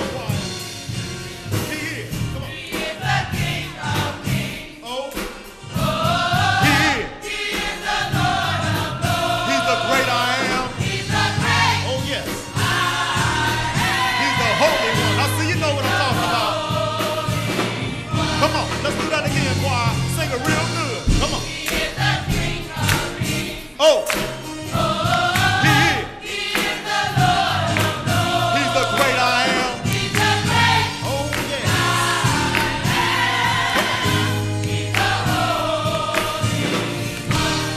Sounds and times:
Choir: 0:02.0 - 0:37.7.

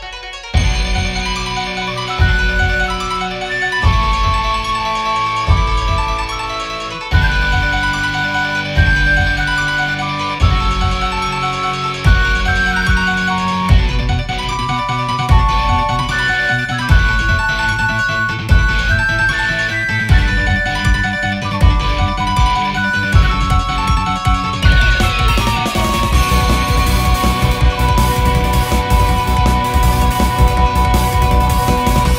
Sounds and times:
Music: 0:00.0 - 0:32.1.

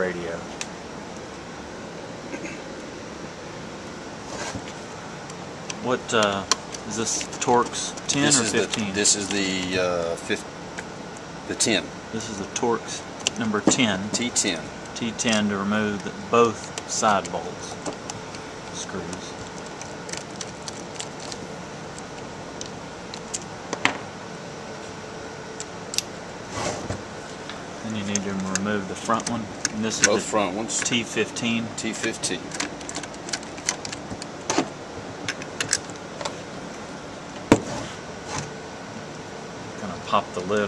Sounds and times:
Speech: 0:00.0 - 0:00.6, 0:05.8 - 0:10.5, 0:11.5 - 0:17.9, 0:18.7 - 0:19.4, 0:27.8 - 0:32.4, 0:39.8 - 0:40.6.

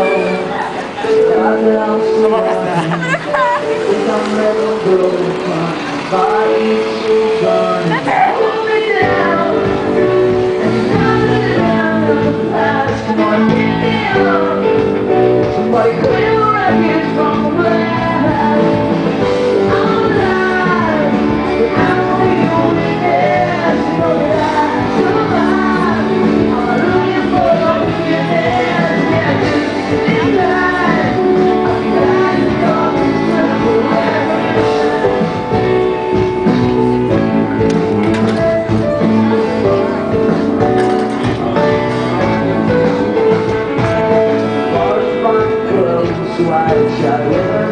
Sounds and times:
Music: 0:00.0 - 0:47.7.

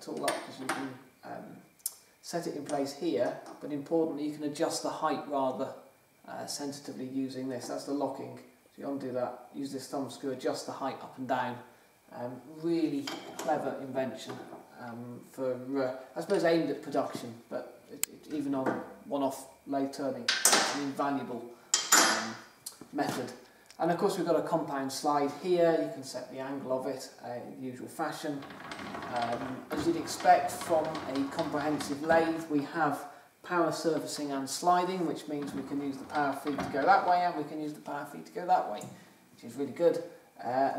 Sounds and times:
Speech: 0:00.0 - 0:28.4, 0:29.0 - 0:40.7.

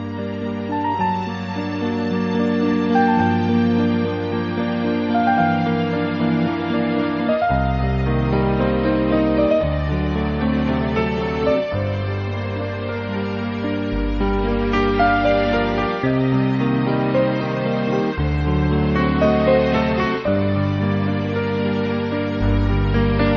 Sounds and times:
Music: 0:00.0 - 0:23.3.

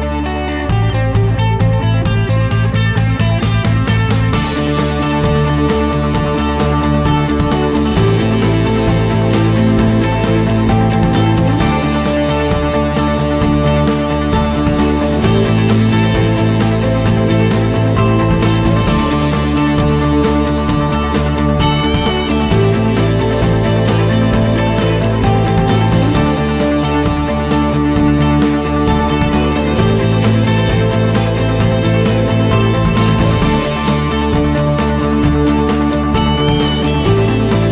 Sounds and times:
Music: 0:00.0 - 0:37.7.

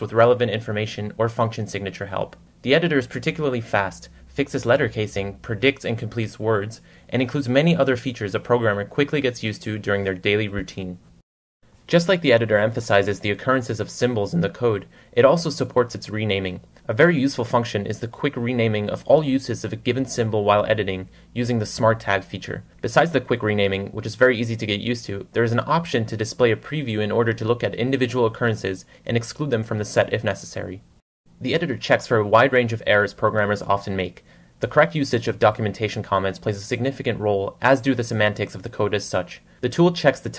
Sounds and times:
Speech: 0:00.0 - 0:11.1, 0:11.9 - 0:40.3.

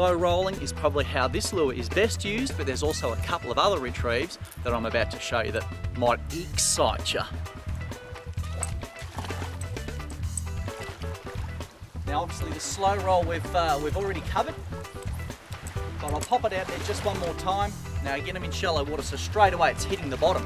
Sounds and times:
Speech: 0:00.0 - 0:07.4, 0:12.1 - 0:14.6, 0:16.0 - 0:20.4
Music: 0:00.0 - 0:20.4.

